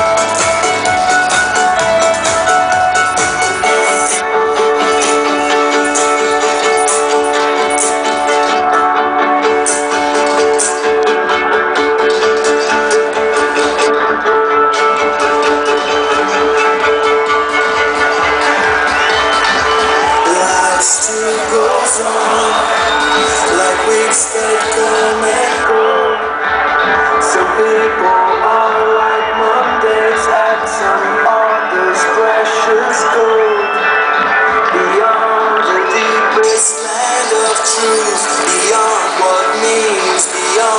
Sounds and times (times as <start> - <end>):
Musical instrument: 0.0 - 40.7.